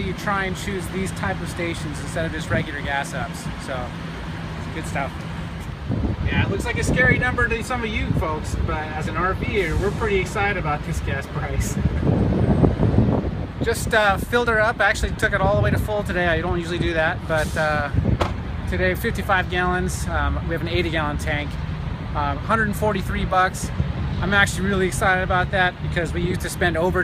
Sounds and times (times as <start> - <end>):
Speech: 0.0 - 4.0, 4.6 - 5.2, 6.2 - 11.9, 13.6 - 18.0, 18.7 - 21.6, 22.2 - 27.0
Outside, urban or manmade: 0.0 - 27.0
Vehicle: 0.0 - 27.0.